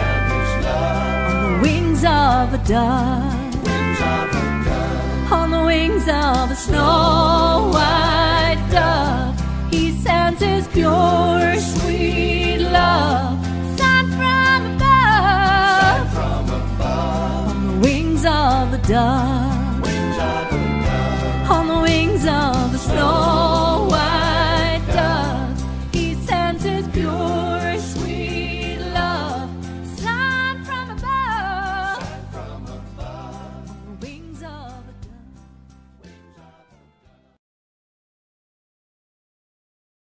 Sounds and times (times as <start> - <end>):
Singing: 0.0 - 9.2, 15.1 - 34.9
Music: 0.0 - 37.4.